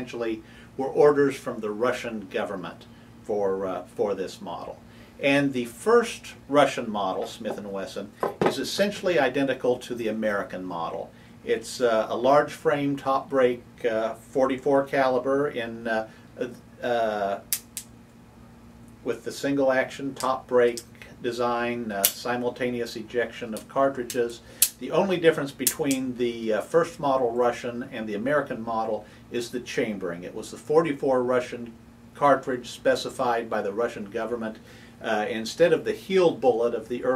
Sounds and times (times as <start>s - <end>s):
Speech: 0.0s - 17.5s, 19.0s - 37.1s.